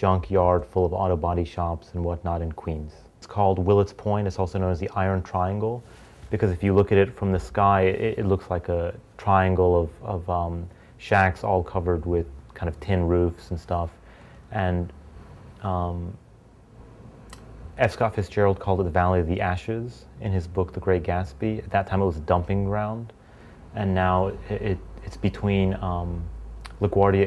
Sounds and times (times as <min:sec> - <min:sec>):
Speech: 0:00.0 - 0:15.0, 0:15.6 - 0:16.2, 0:17.7 - 0:27.2.